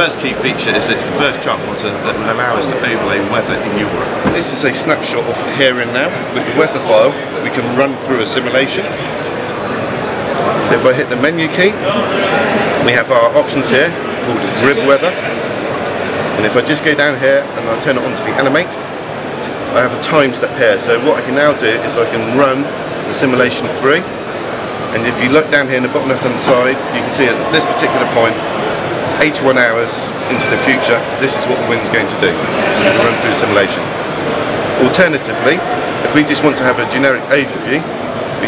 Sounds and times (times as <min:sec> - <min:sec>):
Speech: 0:00.0 - 0:08.9, 0:19.8 - 0:24.1, 0:24.9 - 0:28.4, 0:29.2 - 0:33.8, 0:34.8 - 0:38.4.